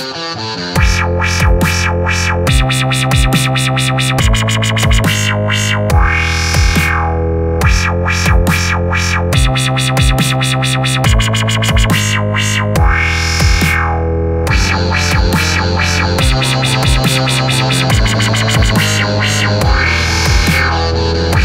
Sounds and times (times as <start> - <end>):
Dubstep: 0.0 - 21.4.